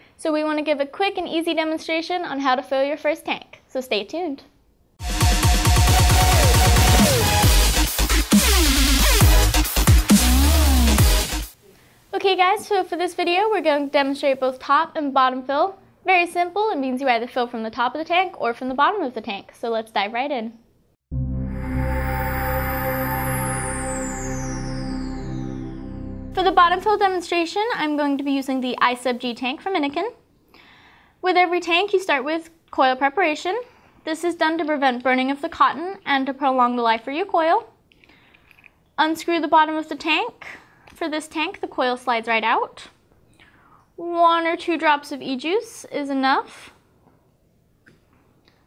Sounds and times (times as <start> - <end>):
Speech: 0.2 - 4.5, 12.2 - 20.6, 26.4 - 30.2, 31.2 - 37.8, 39.0 - 43.0, 44.0 - 46.8
Music: 5.0 - 11.6, 21.1 - 27.2.